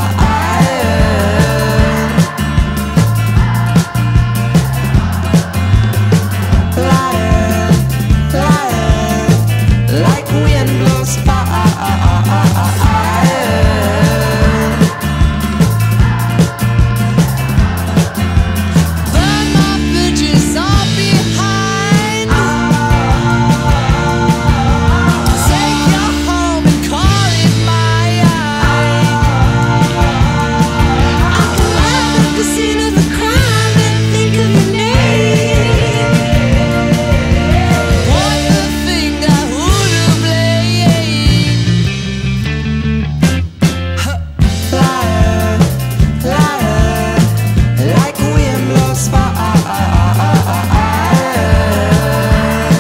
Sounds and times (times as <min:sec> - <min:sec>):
Music: 0:00.0 - 0:52.8.